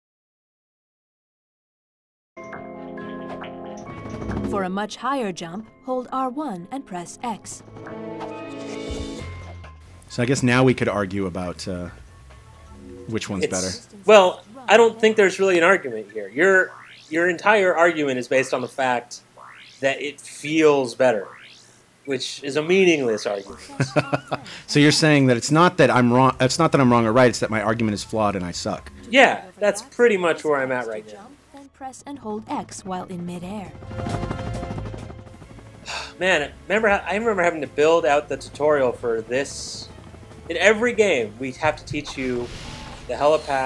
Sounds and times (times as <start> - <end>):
Music: 2.4 - 16.3, 23.5 - 43.6
Speech: 4.5 - 7.6, 10.1 - 12.0, 13.1 - 19.2, 22.1 - 33.7, 36.2 - 39.9, 40.5 - 42.5, 43.1 - 43.6.